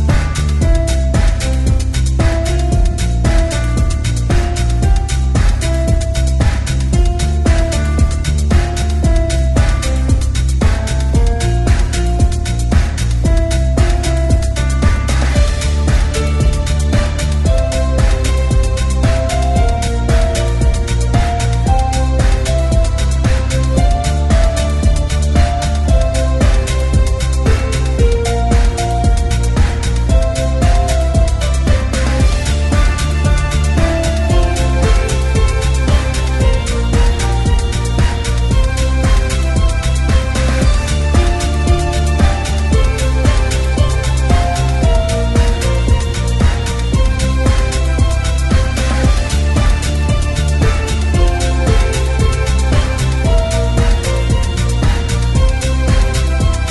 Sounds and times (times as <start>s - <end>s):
Background music: 0.0s - 56.7s.